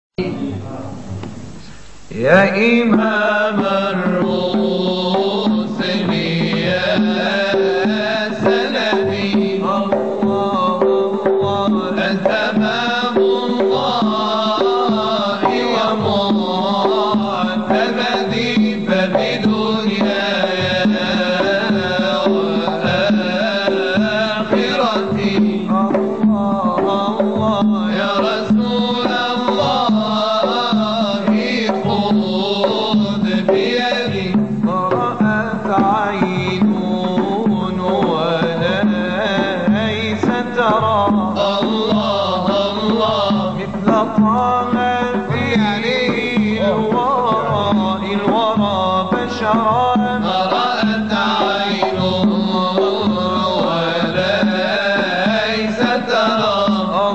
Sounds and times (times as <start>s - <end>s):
Carnatic music: 0.2s - 57.1s.